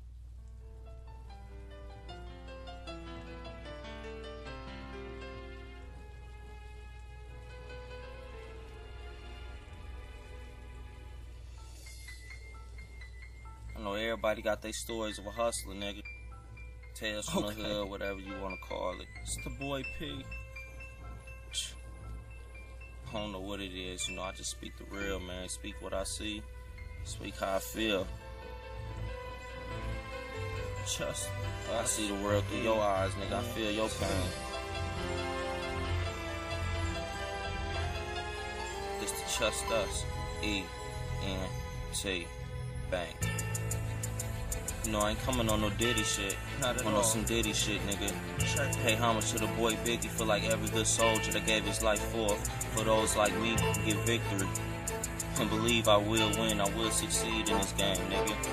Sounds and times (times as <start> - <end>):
Music: 0.0 - 58.5
Speech: 13.8 - 16.0, 17.0 - 20.3, 21.5 - 21.8, 23.1 - 26.4, 27.1 - 28.1, 30.8 - 34.4, 39.0 - 42.3, 42.9 - 43.2, 44.9 - 54.5, 55.4 - 58.5.